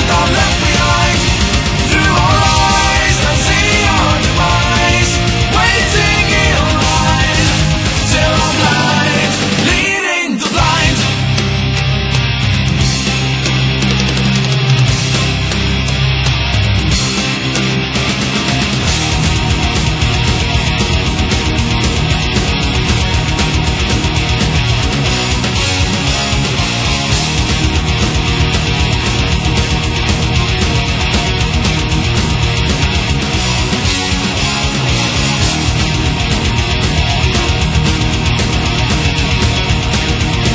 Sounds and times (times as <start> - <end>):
Angry music: 0.0 - 40.5
Heavy metal: 0.0 - 40.5.